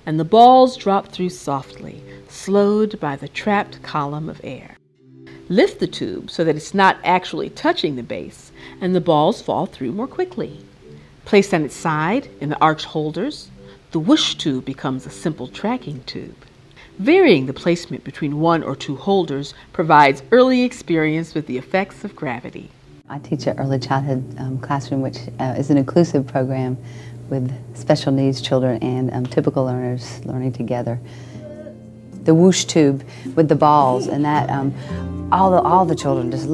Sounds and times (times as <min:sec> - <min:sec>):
Speech: 0:00.0 - 0:04.8, 0:05.5 - 0:10.6, 0:11.3 - 0:16.4, 0:17.0 - 0:31.0, 0:32.2 - 0:36.5
Music: 0:00.0 - 0:36.5.